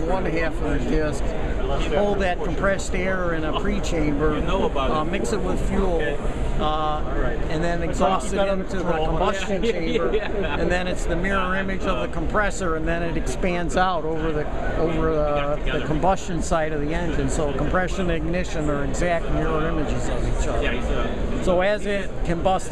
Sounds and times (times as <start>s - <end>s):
Speech: 0.0s - 22.7s.